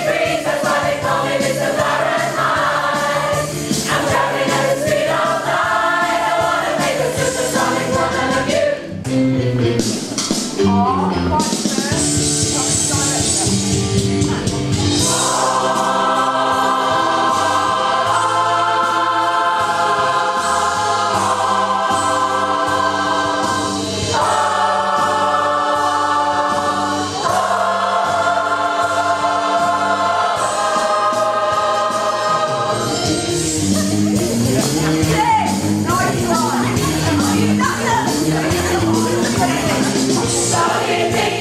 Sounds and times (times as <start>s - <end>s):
Choir: 0.0s - 9.0s, 14.9s - 35.2s, 36.0s - 41.4s.